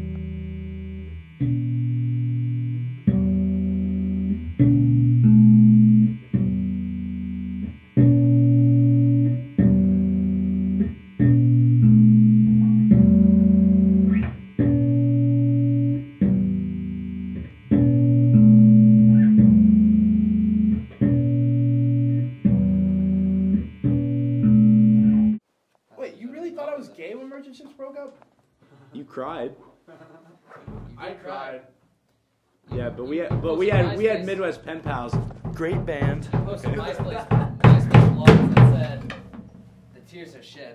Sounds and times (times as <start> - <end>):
Speech: 25.9 - 28.2, 28.9 - 29.7, 30.9 - 31.8, 32.7 - 39.2, 40.0 - 40.7.